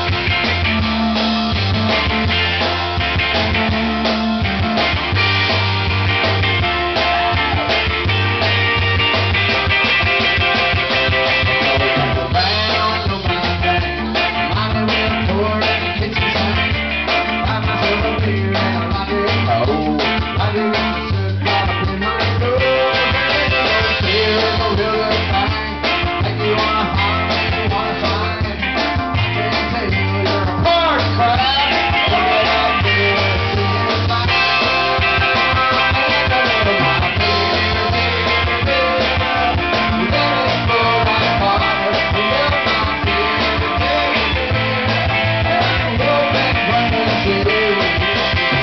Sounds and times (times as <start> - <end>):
Music: 0.0 - 48.6
Male singing: 11.5 - 48.6.